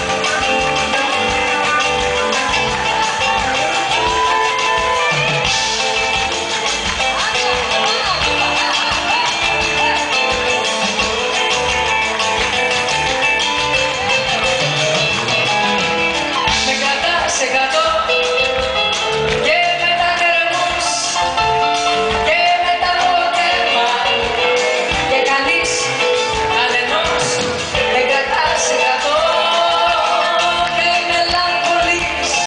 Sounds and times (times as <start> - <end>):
Female singing: 0.0 - 5.8, 7.0 - 10.8, 16.5 - 18.3, 19.4 - 21.4, 22.1 - 32.4
Music: 0.0 - 32.4.